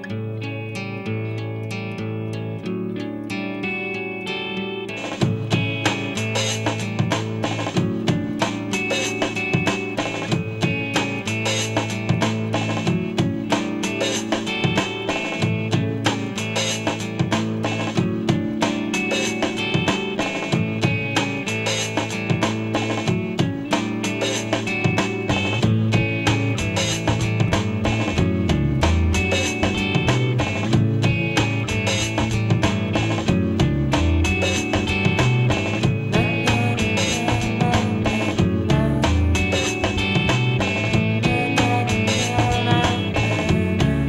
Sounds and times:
Psychedelic rock: 0:00.0 - 0:44.0.

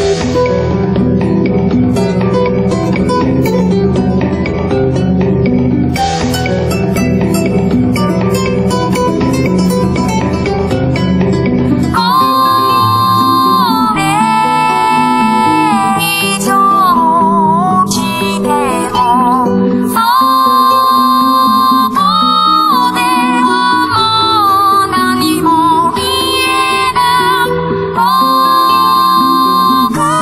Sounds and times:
Music: 0:00.0 - 0:30.2.

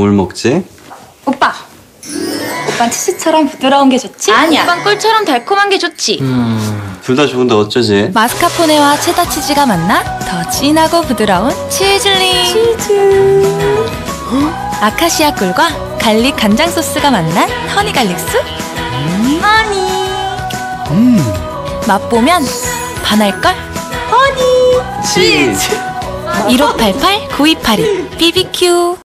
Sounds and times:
Music: 0:02.0 - 0:07.3, 0:08.2 - 0:29.0.

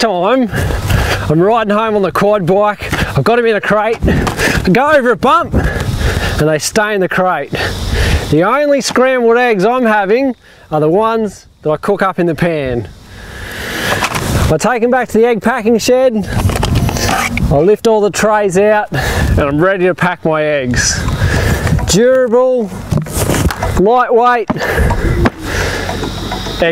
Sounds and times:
Speech: 0:00.0 - 0:00.5, 0:01.3 - 0:04.0, 0:04.7 - 0:05.6, 0:06.4 - 0:07.6, 0:08.3 - 0:12.9, 0:14.5 - 0:16.3, 0:17.5 - 0:21.0, 0:21.9 - 0:22.7, 0:23.8 - 0:24.5.

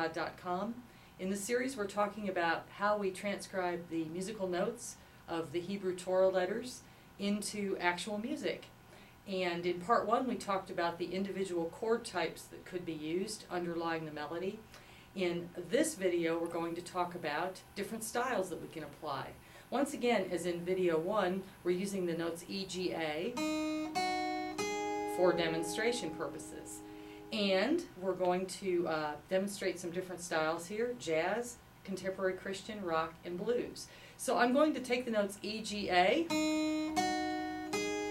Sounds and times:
Speech: 0:00.0 - 0:08.7, 0:09.3 - 0:14.6, 0:15.2 - 0:23.4, 0:25.2 - 0:36.3
Music: 0:23.4 - 0:27.5, 0:36.3 - 0:38.1.

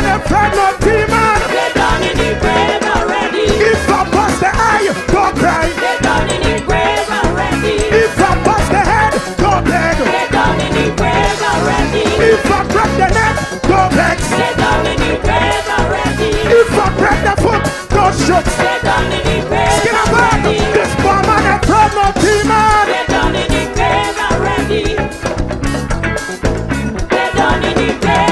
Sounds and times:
Singing: 0:00.0 - 0:25.2, 0:27.1 - 0:28.3
Music: 0:00.0 - 0:28.3.

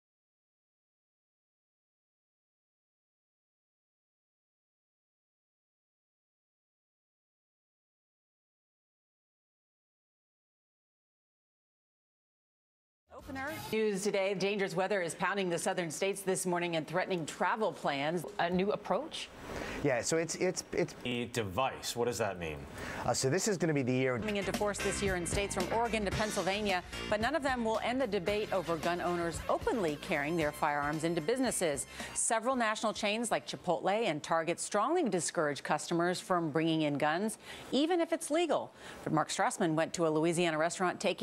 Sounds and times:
Music: 0:13.1 - 0:14.2, 0:24.2 - 0:33.0
Speech: 0:19.8 - 0:41.2.

